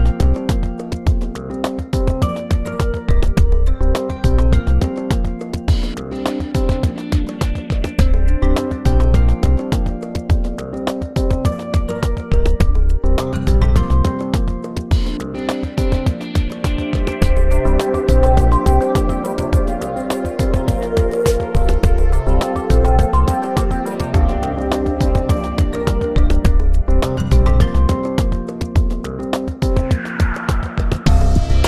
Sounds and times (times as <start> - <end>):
Music: 0.0 - 31.6.